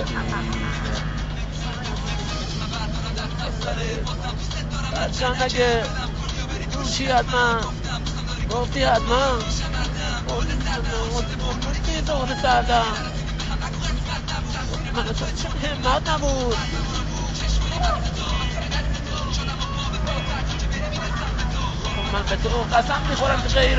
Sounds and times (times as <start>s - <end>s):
Male singing: 0.0s - 23.7s
Music: 0.0s - 23.7s.